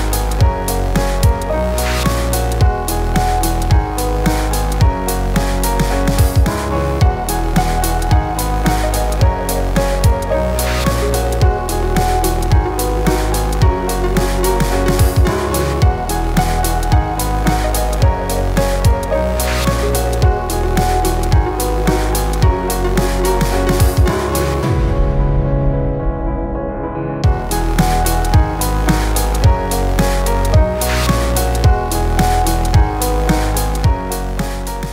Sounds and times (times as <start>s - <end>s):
Music: 0.0s - 34.9s.